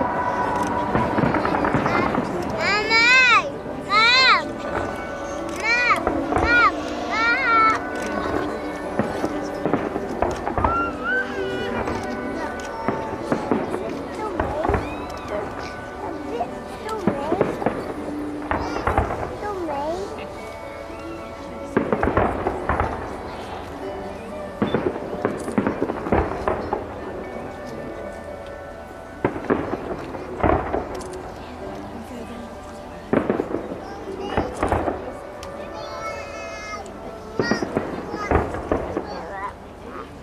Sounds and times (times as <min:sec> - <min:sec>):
Fireworks: 0:00.0 - 0:03.3, 0:04.0 - 0:20.1, 0:21.6 - 0:28.6, 0:29.2 - 0:32.3, 0:33.0 - 0:40.1
Music: 0:00.0 - 0:40.2
Outside, urban or manmade: 0:00.0 - 0:40.2
Speech: 0:10.7 - 0:20.6, 0:29.6 - 0:40.2.